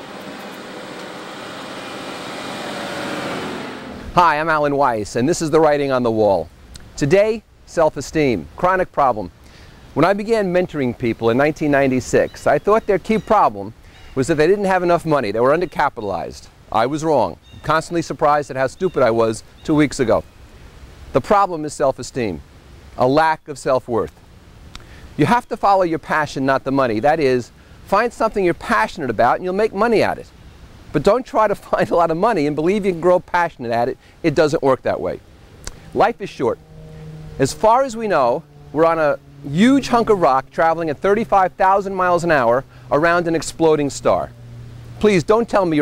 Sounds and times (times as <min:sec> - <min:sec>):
Speech: 0:04.2 - 0:09.3, 0:10.0 - 0:20.2, 0:21.2 - 0:22.4, 0:23.0 - 0:24.1, 0:25.2 - 0:30.3, 0:31.0 - 0:35.2, 0:35.9 - 0:36.6, 0:37.4 - 0:44.3, 0:45.0 - 0:45.8.